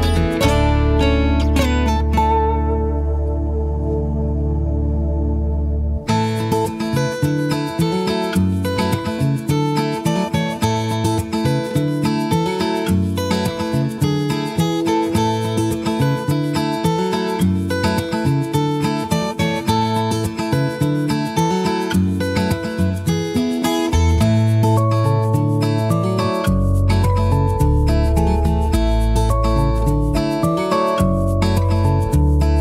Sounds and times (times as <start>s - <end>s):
Music: 0.0s - 32.6s.